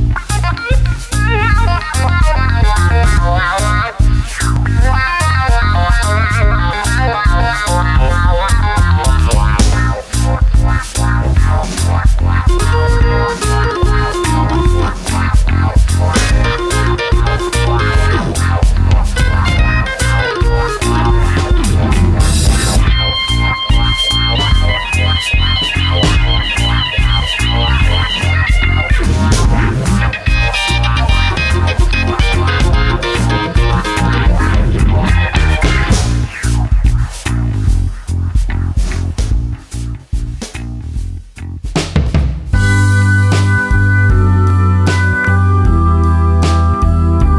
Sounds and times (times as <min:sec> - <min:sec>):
Blues: 0:00.0 - 0:47.3
Rhythm and blues: 0:00.0 - 0:47.3.